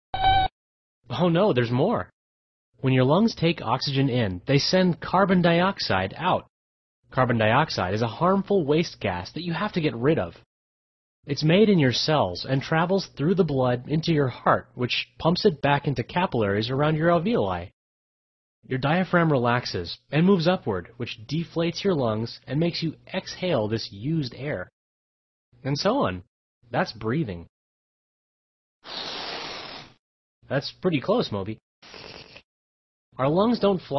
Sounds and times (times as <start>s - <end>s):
Speech: 1.1s - 2.1s, 2.8s - 6.5s, 7.1s - 10.4s, 11.3s - 17.8s, 18.6s - 24.7s, 25.6s - 27.5s, 30.5s - 31.6s, 33.2s - 33.9s.